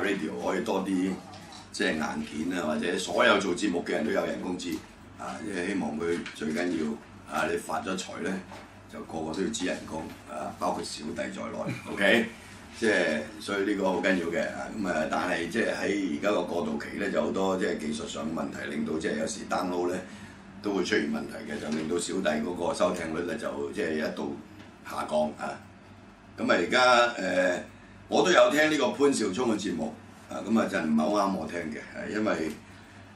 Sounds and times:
Speech: 0:00.0 - 0:25.7, 0:26.4 - 0:32.6.

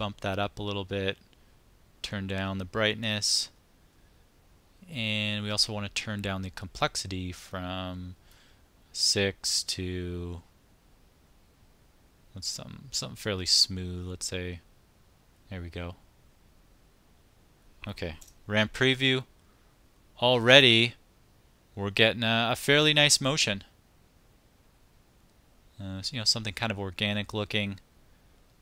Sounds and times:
Speech: 0:00.0 - 0:01.2, 0:02.0 - 0:03.6, 0:04.8 - 0:08.2, 0:09.0 - 0:10.5, 0:12.4 - 0:14.6, 0:15.5 - 0:16.0, 0:17.8 - 0:19.3, 0:20.2 - 0:21.0, 0:21.8 - 0:23.7, 0:25.8 - 0:27.8.

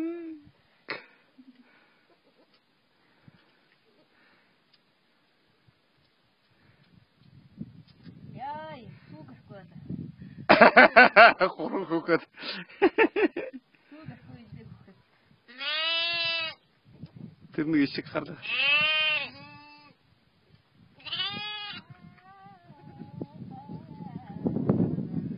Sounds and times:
Bleat: 0:15.5 - 0:16.6, 0:18.4 - 0:20.0, 0:21.0 - 0:22.8
Speech: 0:17.6 - 0:18.4.

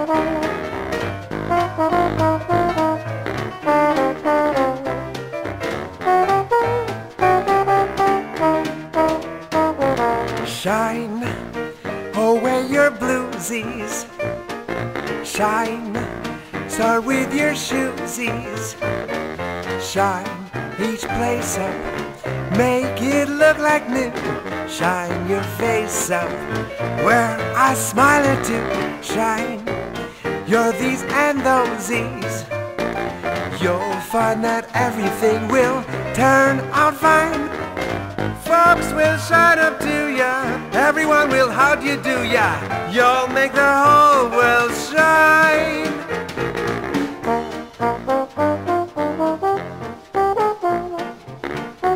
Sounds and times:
French horn: 0:00.0 - 0:51.9.

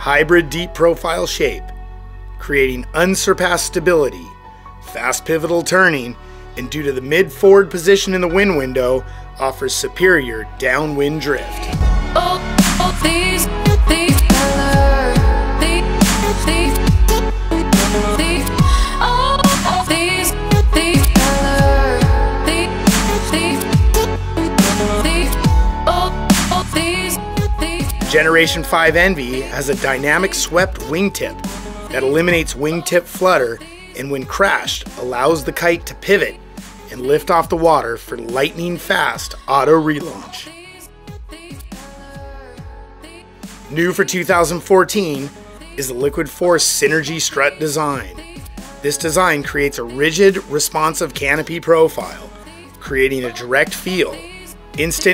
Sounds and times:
Speech: 0:00.0 - 0:01.7, 0:02.4 - 0:04.3, 0:04.9 - 0:11.7, 0:28.1 - 0:40.5, 0:43.7 - 0:48.1, 0:48.8 - 0:54.2, 0:54.8 - 0:55.1
Music: 0:00.0 - 0:55.1.

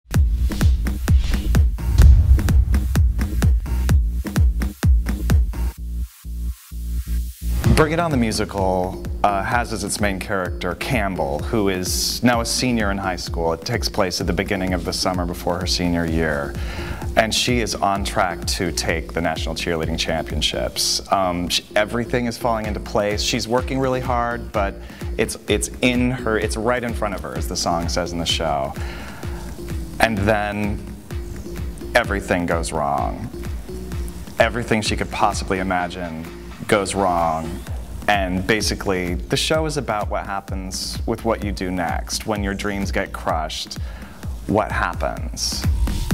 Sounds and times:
Music: 0:00.1 - 0:46.1
Speech: 0:07.6 - 0:28.8, 0:30.0 - 0:30.8, 0:31.9 - 0:33.3, 0:34.4 - 0:43.8, 0:44.5 - 0:45.7.

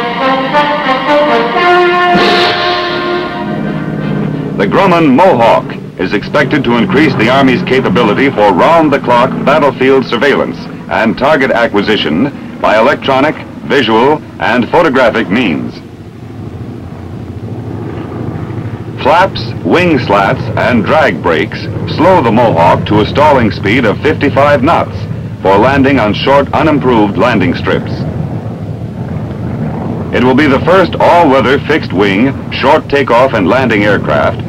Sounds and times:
Fixed-wing aircraft, airplane: 0:00.0 - 0:34.4
Outside, urban or manmade: 0:00.0 - 0:34.4
Speech: 0:04.6 - 0:15.9, 0:19.0 - 0:28.1, 0:30.2 - 0:34.4.

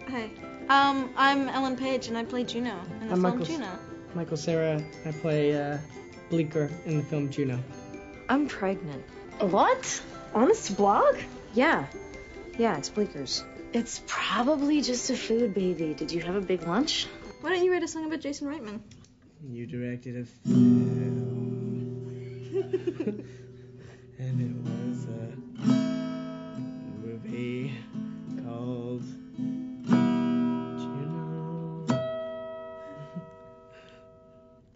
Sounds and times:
Music: 0:00.0 - 0:34.7
Male singing: 0:19.5 - 0:22.0, 0:24.2 - 0:25.6, 0:26.9 - 0:29.2, 0:30.6 - 0:32.0.

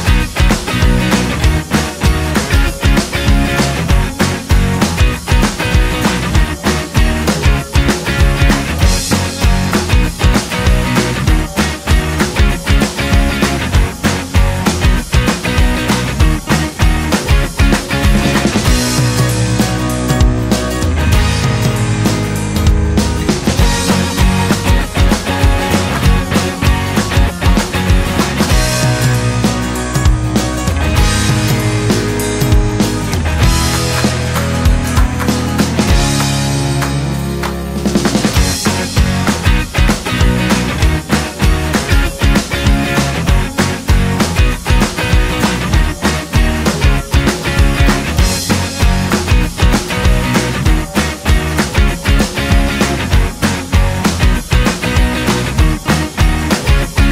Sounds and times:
Music: 0:00.0 - 0:57.1.

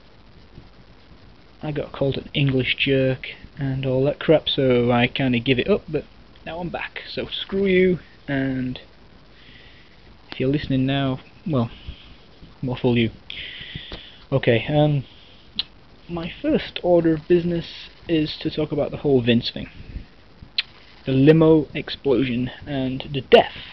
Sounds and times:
Speech: 0:01.6 - 0:08.9, 0:10.3 - 0:11.8, 0:12.6 - 0:13.2, 0:14.3 - 0:15.1, 0:16.1 - 0:19.8, 0:21.1 - 0:23.7.

